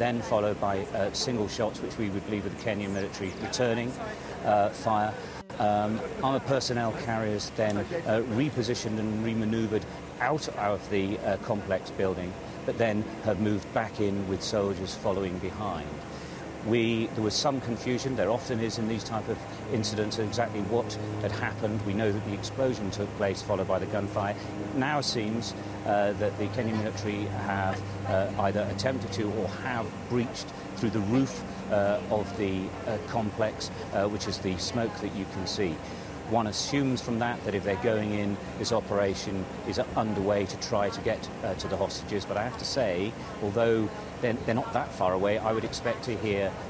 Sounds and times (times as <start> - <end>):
Speech: 0.0 - 16.0, 16.6 - 46.7.